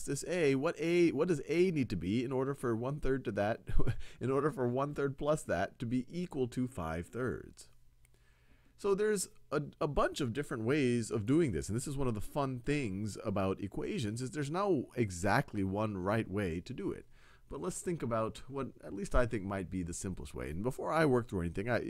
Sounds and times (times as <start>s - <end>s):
Speech: 0.0s - 7.8s, 8.8s - 21.9s.